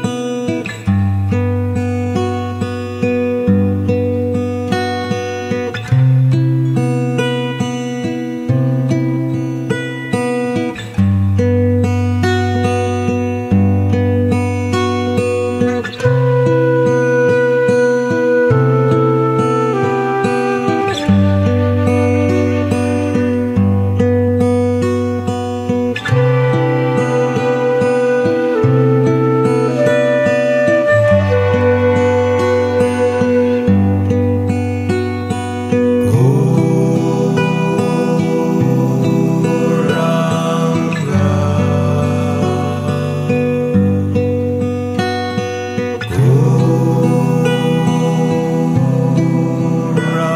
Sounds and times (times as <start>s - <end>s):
Music: 0.0s - 50.3s.